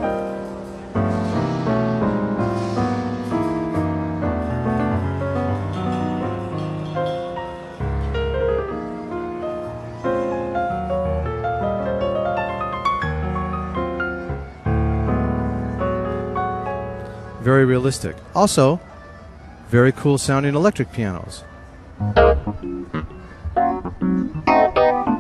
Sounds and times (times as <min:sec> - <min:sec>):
Music: 0:00.0 - 0:25.2.